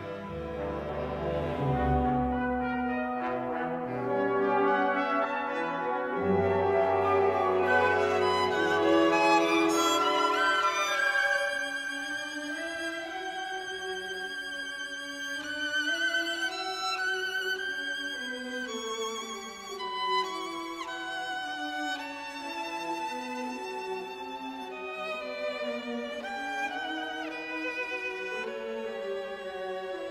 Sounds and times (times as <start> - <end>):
Violin, fiddle: 0.0 - 30.1.